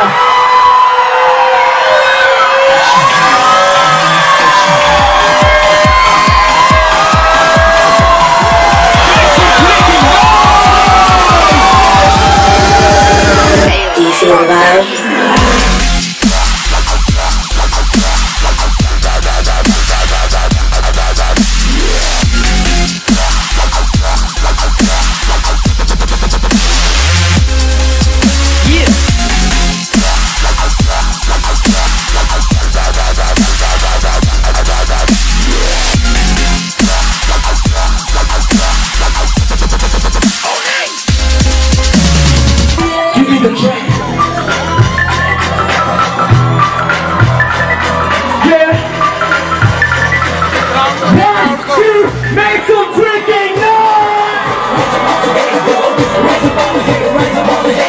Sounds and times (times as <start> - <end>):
Dubstep: 0.0 - 57.8.